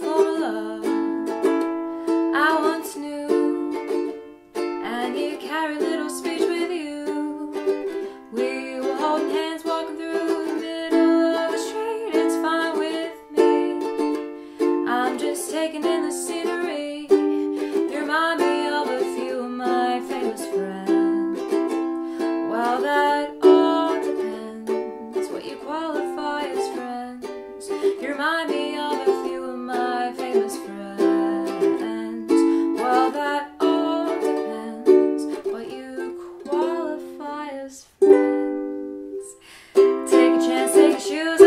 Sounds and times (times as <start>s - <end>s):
Inside, small room: 0.0s - 41.4s
Ukulele: 0.0s - 41.4s.